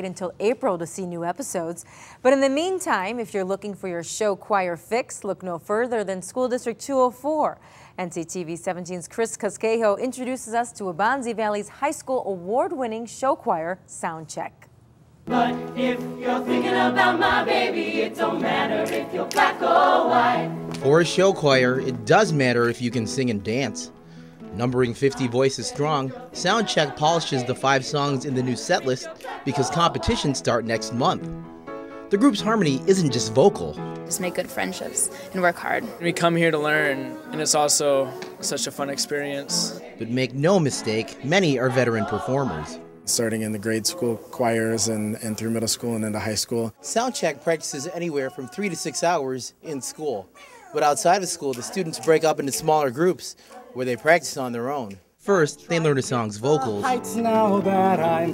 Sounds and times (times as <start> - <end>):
Music: 15.3 - 45.0, 55.3 - 58.3.